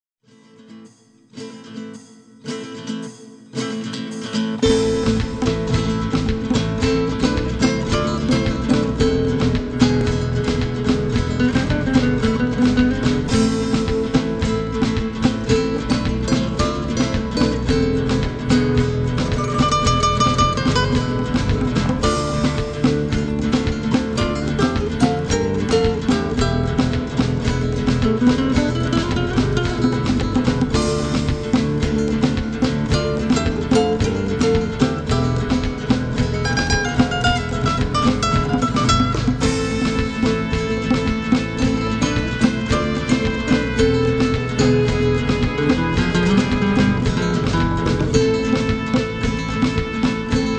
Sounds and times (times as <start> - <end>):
Guitar: 0.2 - 50.5.